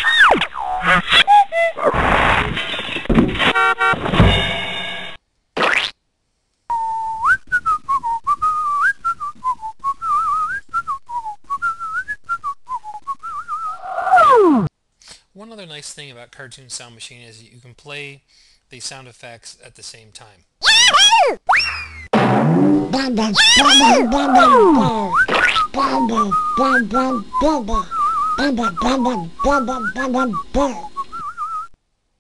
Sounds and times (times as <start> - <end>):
Sound effect: 0.0 - 6.0, 20.6 - 24.6
Speech: 15.3 - 20.4, 22.9 - 30.9.